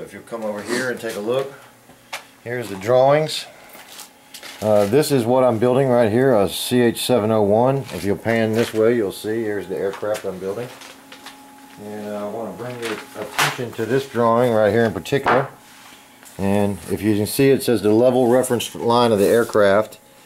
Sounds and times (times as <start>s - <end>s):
Speech: 0.0s - 1.6s, 2.4s - 3.5s, 4.6s - 10.8s, 11.8s - 15.5s, 16.4s - 20.0s.